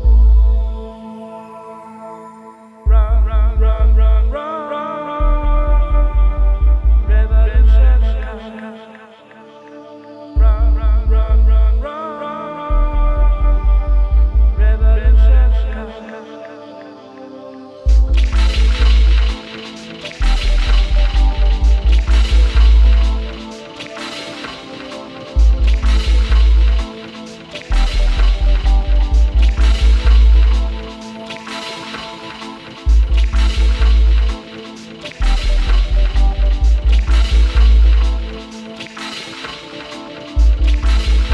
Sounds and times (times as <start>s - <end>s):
Music: 0.0s - 41.3s.